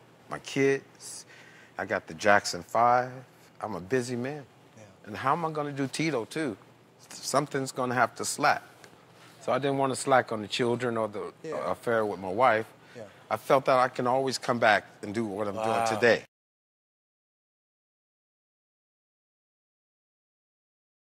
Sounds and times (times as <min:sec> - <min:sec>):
Speech: 0:09.4 - 0:16.3.